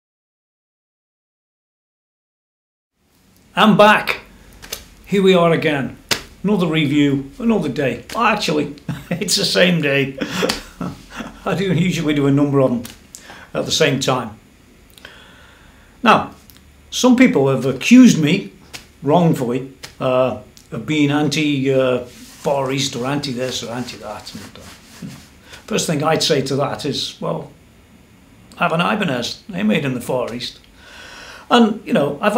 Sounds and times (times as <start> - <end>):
Speech: 3.5 - 4.3, 5.1 - 14.4, 16.0 - 25.1, 25.7 - 27.6, 28.6 - 30.6, 31.5 - 32.3.